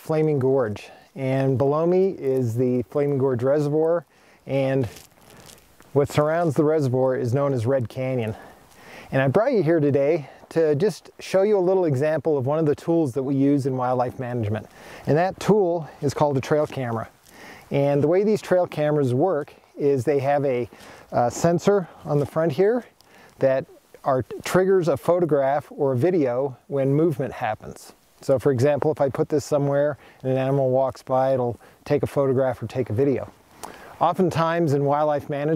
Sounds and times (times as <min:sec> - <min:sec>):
Speech: 0:00.0 - 0:05.0, 0:06.0 - 0:08.5, 0:09.1 - 0:17.1, 0:17.7 - 0:33.4, 0:34.0 - 0:35.5.